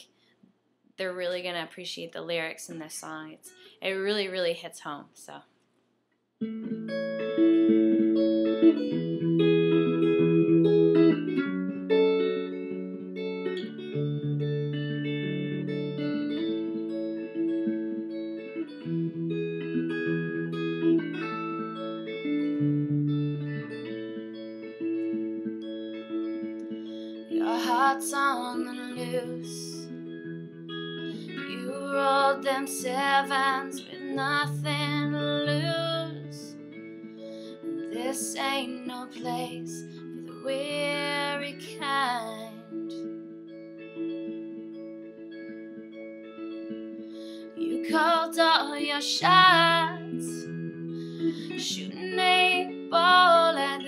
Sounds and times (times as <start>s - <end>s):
Guitar: 0.0s - 0.4s, 6.4s - 53.8s
Speech: 1.0s - 5.5s.